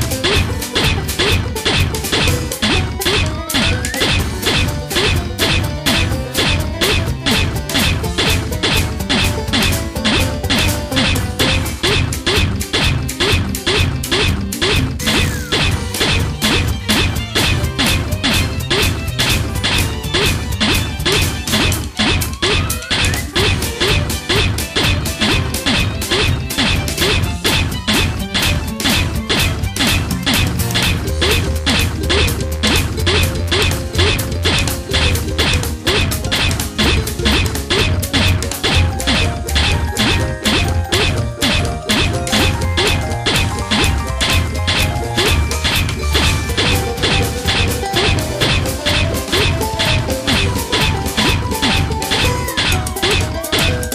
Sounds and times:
Video game music: 0:00.0 - 0:53.9.

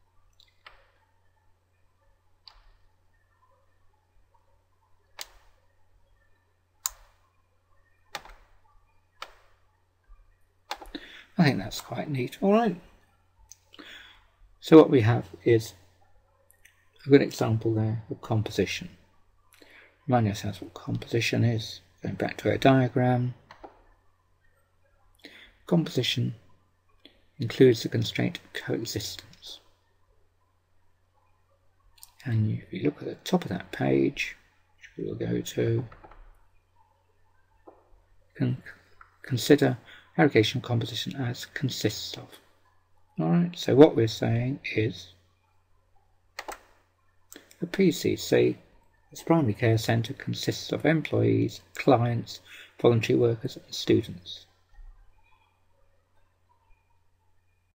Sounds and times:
Speech: 0:11.4 - 0:12.9, 0:14.6 - 0:15.8, 0:17.0 - 0:19.0, 0:20.1 - 0:23.4, 0:25.7 - 0:26.4, 0:27.4 - 0:29.7, 0:32.1 - 0:36.0, 0:38.4 - 0:42.4, 0:43.2 - 0:45.2, 0:47.4 - 0:54.5.

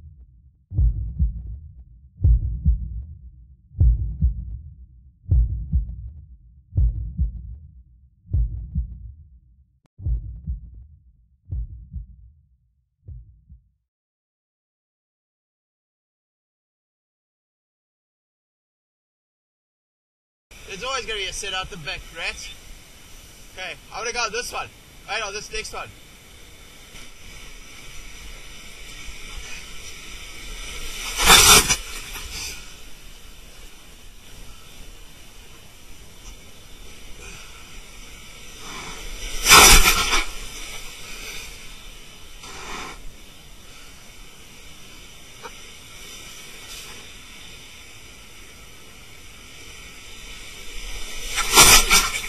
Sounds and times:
Speech: 0:20.6 - 0:22.6, 0:23.6 - 0:26.0.

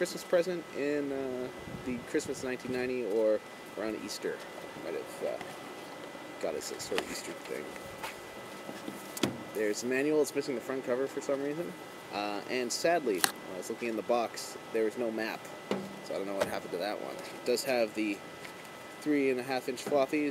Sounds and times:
Speech: 0:00.0 - 0:05.5, 0:06.4 - 0:07.7, 0:09.6 - 0:15.5, 0:16.1 - 0:18.2, 0:19.0 - 0:20.3
Outside, urban or manmade: 0:00.0 - 0:20.3.

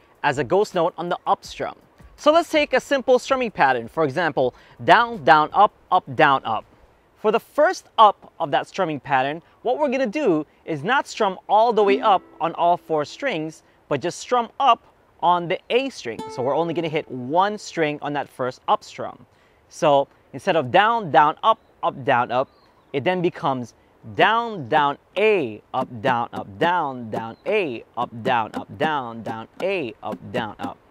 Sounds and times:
Speech: 0:00.2 - 0:30.9
Music: 0:01.5 - 0:02.3, 0:11.8 - 0:13.6, 0:16.2 - 0:17.3.

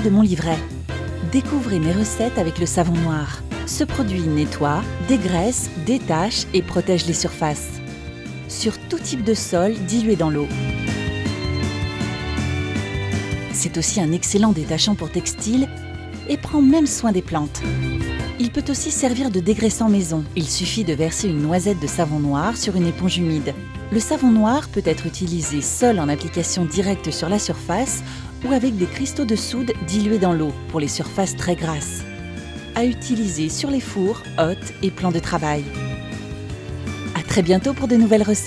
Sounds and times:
Speech: 0:00.0 - 0:07.8, 0:08.5 - 0:10.6, 0:13.6 - 0:15.7, 0:16.3 - 0:17.7, 0:18.4 - 0:32.0, 0:32.8 - 0:35.7, 0:37.2 - 0:38.4
Music: 0:00.0 - 0:38.4.

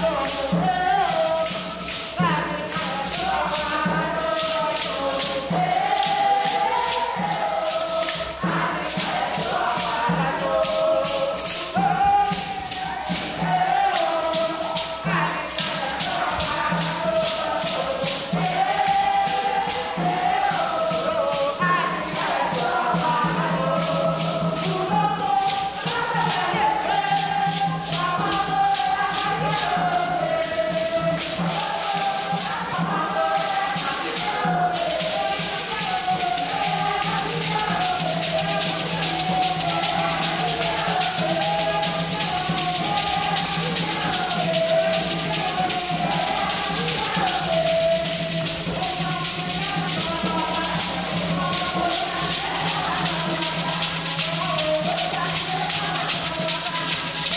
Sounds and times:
Music: 0:00.0 - 0:57.3.

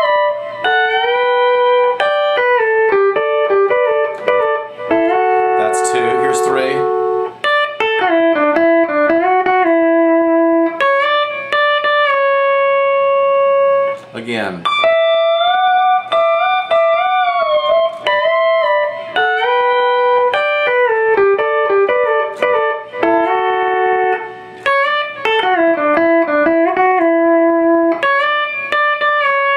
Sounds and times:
Steel guitar, slide guitar: 0:00.0 - 0:29.5
Speech: 0:05.6 - 0:06.9, 0:14.1 - 0:14.8.

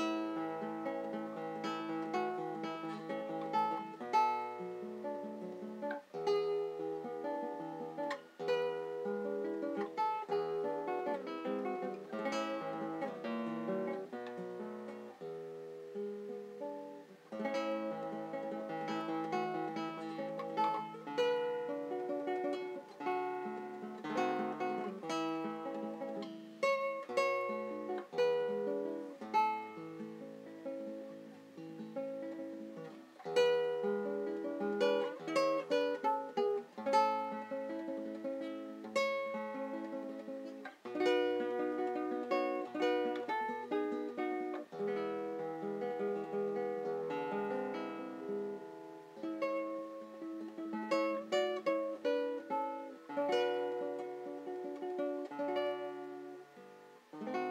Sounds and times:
Acoustic guitar: 0:00.0 - 0:57.5.

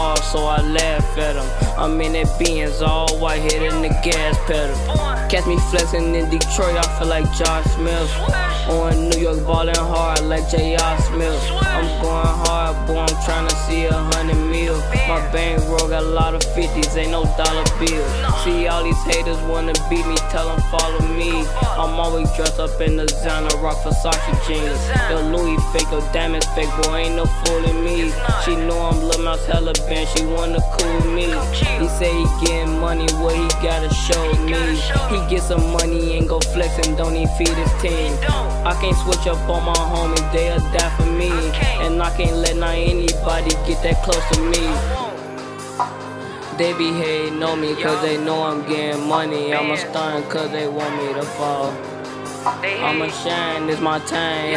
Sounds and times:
Music: 0:00.0 - 0:54.5.

